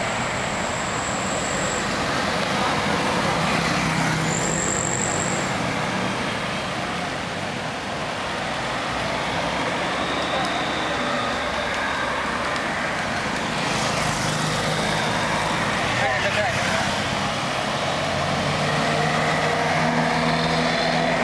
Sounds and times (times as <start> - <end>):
Car: 0.0 - 21.2
Traffic noise, roadway noise: 0.0 - 21.2.